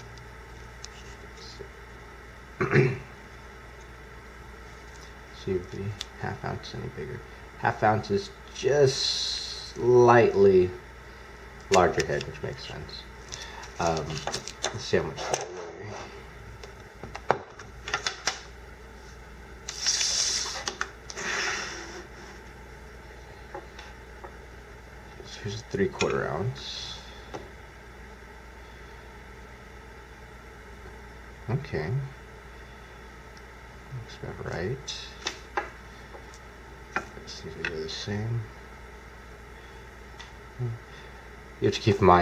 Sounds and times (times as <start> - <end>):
Speech: 5.3 - 10.8, 11.7 - 13.1, 13.8 - 16.1, 25.2 - 27.1, 31.5 - 32.2, 33.9 - 35.2, 37.2 - 38.5, 41.6 - 42.2.